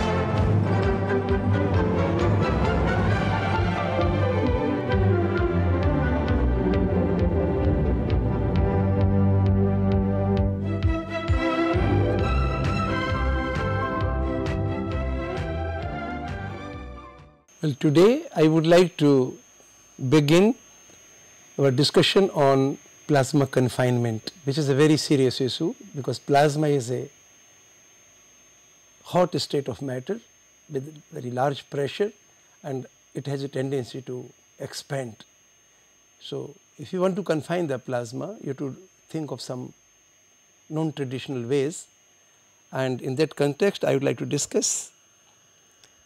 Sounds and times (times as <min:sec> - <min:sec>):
Speech: 0:17.6 - 0:19.4, 0:20.0 - 0:20.6, 0:21.6 - 0:27.1, 0:29.0 - 0:35.3, 0:36.2 - 0:39.8, 0:40.7 - 0:41.9, 0:42.7 - 0:45.0.